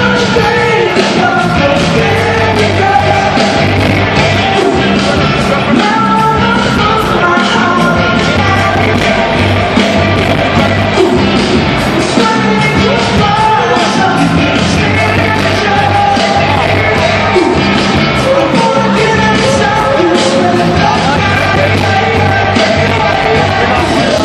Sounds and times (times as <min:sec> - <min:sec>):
Inside, public space: 0:00.0 - 0:24.2
Music: 0:00.0 - 0:24.2.